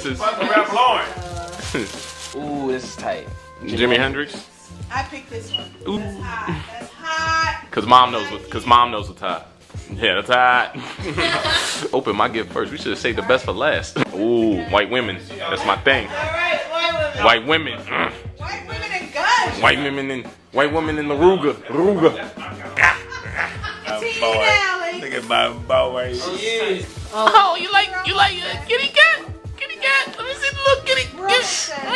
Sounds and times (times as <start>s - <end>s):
Music: 0.0s - 31.9s.